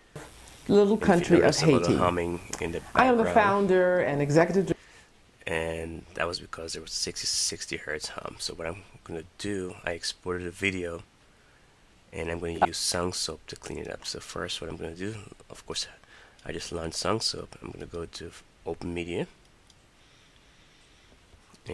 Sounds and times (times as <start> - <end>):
Speech: 0.7 - 4.8, 5.4 - 11.1, 12.2 - 19.4.